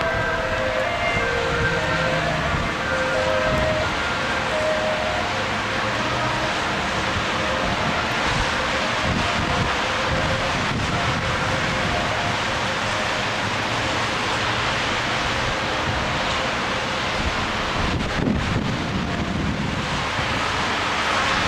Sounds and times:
Vehicle: 0:00.0 - 0:21.4.

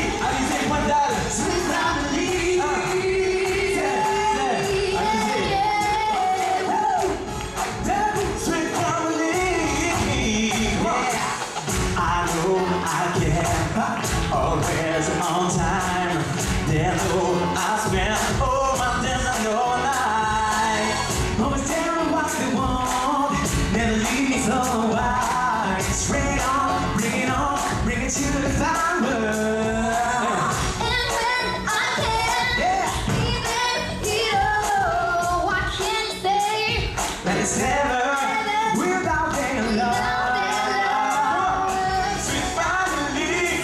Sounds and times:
Music: 0:00.0 - 0:43.6.

